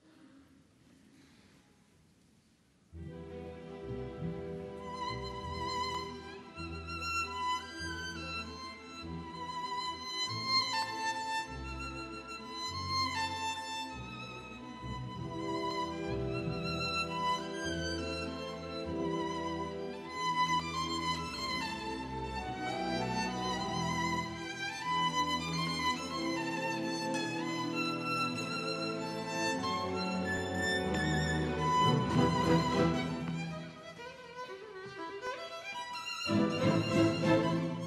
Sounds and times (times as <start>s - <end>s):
Violin, fiddle: 3.0s - 37.8s.